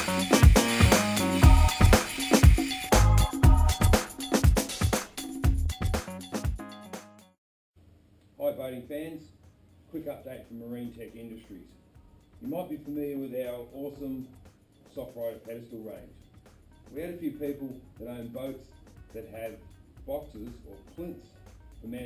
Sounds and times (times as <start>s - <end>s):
Music: 0.0s - 7.4s, 9.4s - 22.0s
Speech: 8.4s - 11.8s, 12.4s - 16.1s, 16.9s - 22.0s.